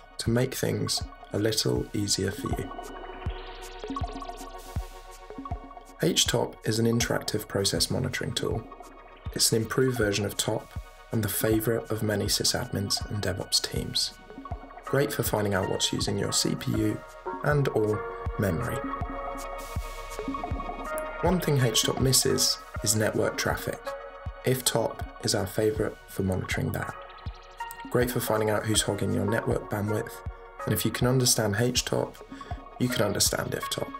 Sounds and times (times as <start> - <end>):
Music: 0.0 - 33.9
Speech: 0.2 - 2.7, 6.0 - 8.7, 9.4 - 14.2, 14.9 - 18.8, 21.2 - 27.0, 27.9 - 32.2, 32.8 - 33.9.